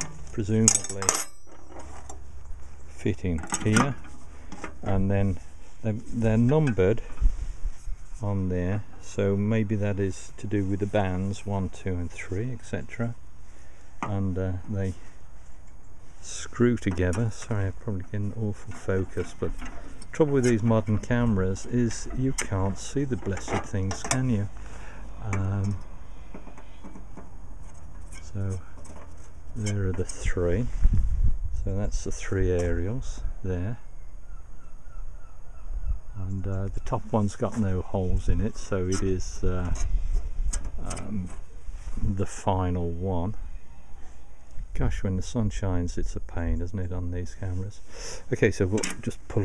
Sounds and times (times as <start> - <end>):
Speech: 0.0 - 1.3, 3.0 - 4.0, 4.8 - 7.1, 8.2 - 13.2, 14.0 - 15.0, 16.2 - 24.6, 25.2 - 25.8, 28.2 - 28.6, 29.6 - 30.7, 31.6 - 33.8, 36.2 - 39.9, 40.8 - 41.4, 42.0 - 43.4, 44.7 - 49.4.